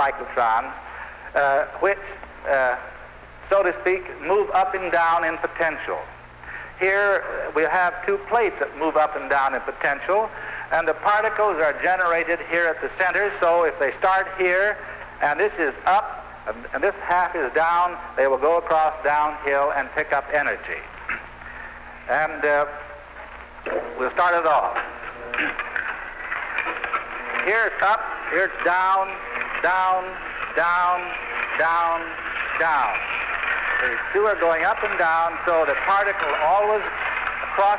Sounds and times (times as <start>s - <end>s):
Speech: 0.0s - 6.2s, 6.8s - 20.9s, 22.1s - 23.0s, 23.7s - 24.9s, 27.4s - 33.2s, 33.8s - 37.0s, 37.6s - 37.7s.